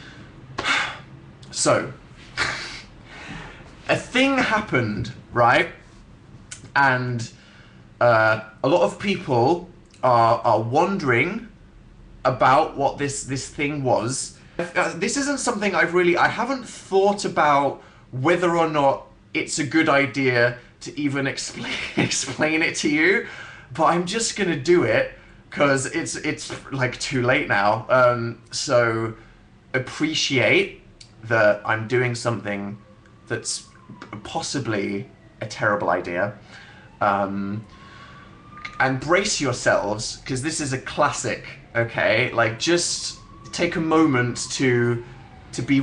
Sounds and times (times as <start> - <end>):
Speech: 1.5 - 2.9, 3.9 - 5.8, 6.6 - 7.4, 8.0 - 11.6, 12.3 - 29.2, 29.8 - 36.4, 37.0 - 37.7, 38.7 - 45.8.